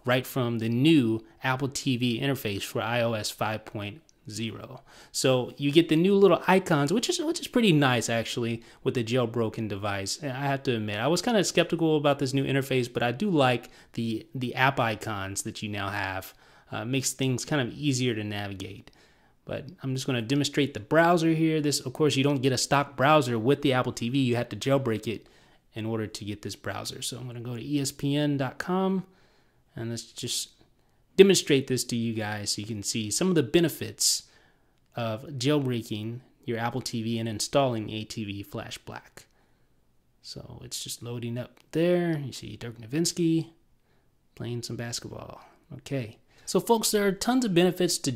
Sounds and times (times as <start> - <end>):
Speech: 0.0 - 29.1, 29.7 - 30.6, 31.2 - 34.3, 34.9 - 39.3, 40.2 - 43.6, 44.4 - 48.1
Inside, small room: 0.0 - 48.1.